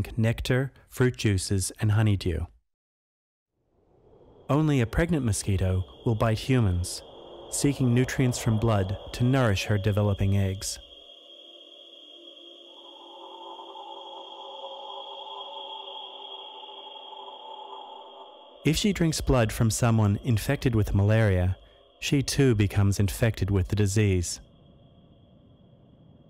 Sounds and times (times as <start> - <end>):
Speech: 0.0 - 2.6, 4.5 - 7.0, 7.6 - 10.8, 18.7 - 24.4.